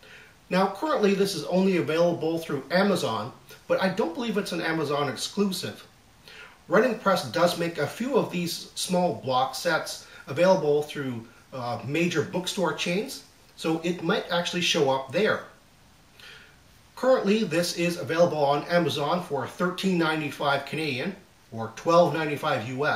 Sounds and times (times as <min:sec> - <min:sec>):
Speech: 0:00.5 - 0:05.9, 0:06.7 - 0:15.6, 0:17.0 - 0:22.9.